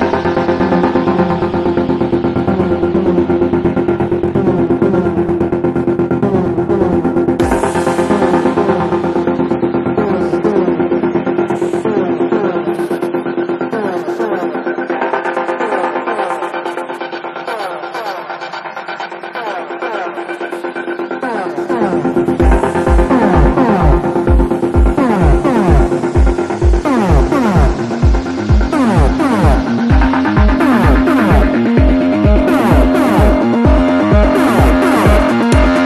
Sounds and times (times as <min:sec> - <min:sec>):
Music: 0:00.0 - 0:35.8.